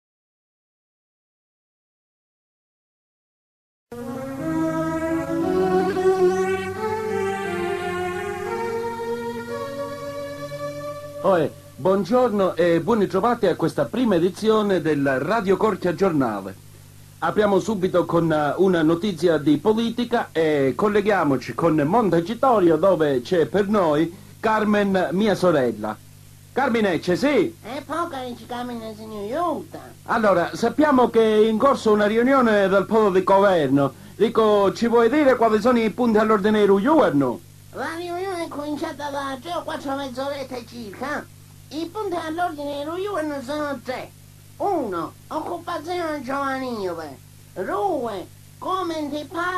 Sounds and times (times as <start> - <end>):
Speech: 11.2 - 16.6, 17.2 - 26.0, 26.6 - 49.5.